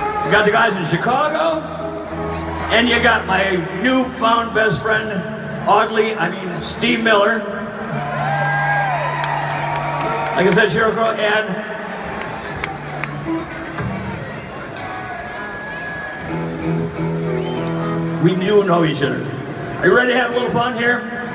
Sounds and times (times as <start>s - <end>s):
Music: 0.0s - 21.3s.